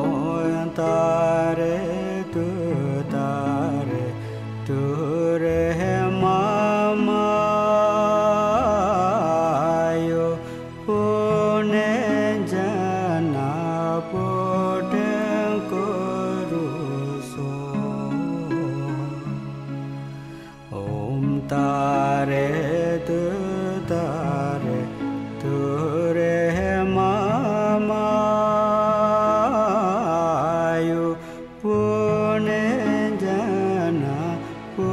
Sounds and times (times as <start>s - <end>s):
Mantra: 20.7s - 34.9s.